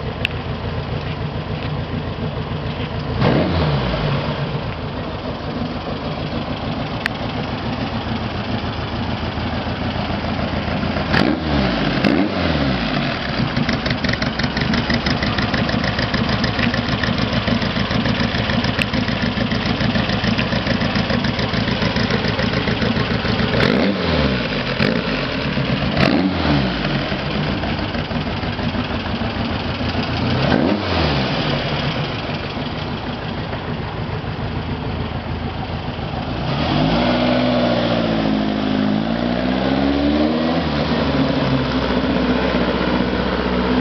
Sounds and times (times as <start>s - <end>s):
Car: 0.0s - 43.8s.